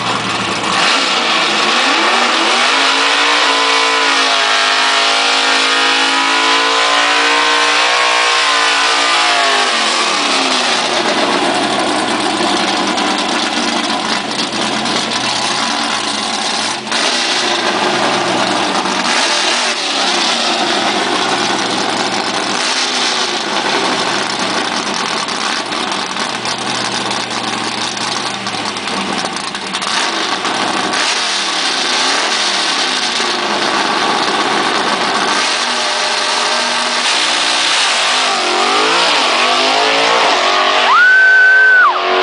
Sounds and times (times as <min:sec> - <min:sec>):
Race car, auto racing: 0:00.0 - 0:42.2.